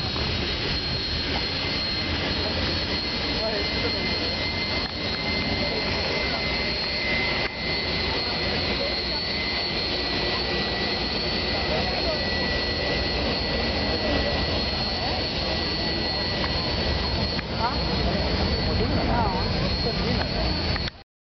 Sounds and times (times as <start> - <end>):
Speech: 1.4 - 21.0.